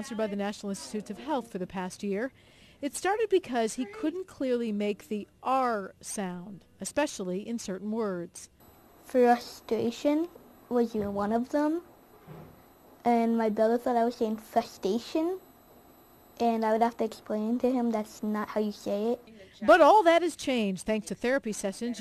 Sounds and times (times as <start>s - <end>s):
Child speech, kid speaking: 0.0s - 2.2s, 2.9s - 5.9s, 9.1s - 11.8s, 13.1s - 15.4s, 16.4s - 22.0s
Female speech, woman speaking: 0.0s - 11.8s, 13.1s - 15.4s, 16.4s - 22.0s
Narration, monologue: 0.0s - 22.0s.